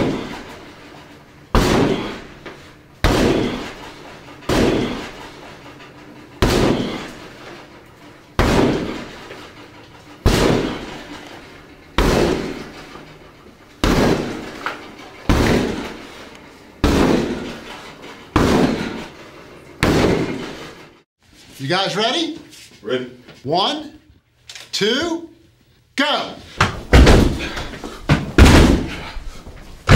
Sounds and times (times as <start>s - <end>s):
Speech: 21.6s - 24.1s, 24.7s - 25.4s, 26.0s - 26.5s.